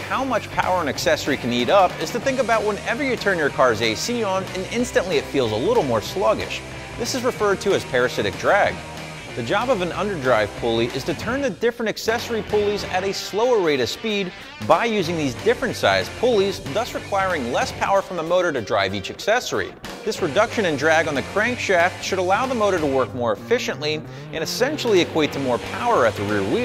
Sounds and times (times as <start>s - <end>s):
Speech: 0.0s - 8.8s, 9.4s - 26.6s
Music: 0.0s - 26.6s.